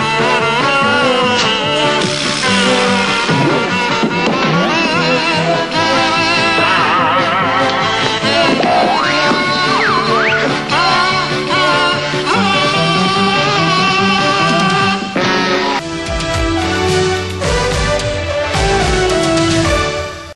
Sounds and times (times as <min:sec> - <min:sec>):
Rhythm and blues: 0:01.2 - 0:20.0.